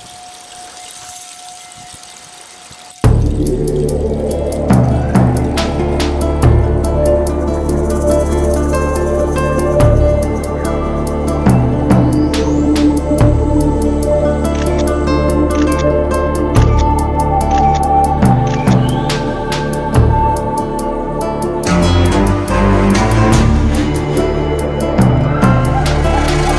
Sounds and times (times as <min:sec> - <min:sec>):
Music: 0:02.9 - 0:26.5.